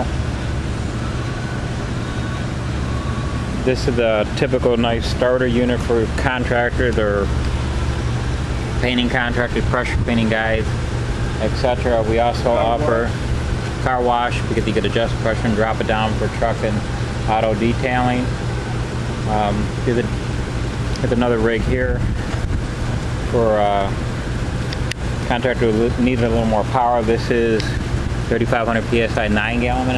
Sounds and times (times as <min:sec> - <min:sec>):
Speech: 0:03.6 - 0:07.3, 0:08.8 - 0:10.7, 0:11.4 - 0:13.2, 0:13.8 - 0:18.3, 0:19.2 - 0:20.2, 0:21.0 - 0:22.0, 0:23.3 - 0:24.0, 0:25.3 - 0:29.9.